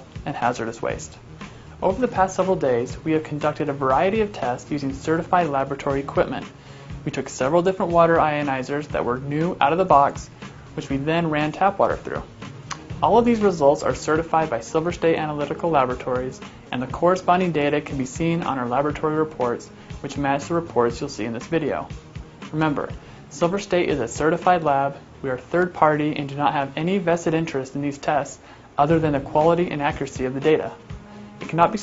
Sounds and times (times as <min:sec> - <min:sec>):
Speech: 0:00.0 - 0:01.2, 0:01.8 - 0:12.3, 0:13.0 - 0:21.9, 0:22.5 - 0:30.8, 0:31.4 - 0:31.8
Music: 0:00.0 - 0:31.8.